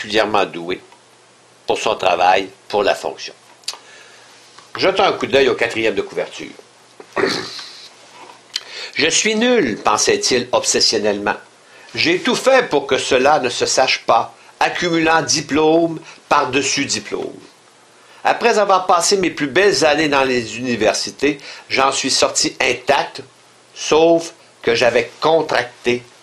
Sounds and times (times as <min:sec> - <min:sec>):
Speech: 0:00.0 - 0:00.9, 0:01.7 - 0:03.4, 0:04.8 - 0:06.6, 0:09.0 - 0:17.6, 0:18.2 - 0:26.1.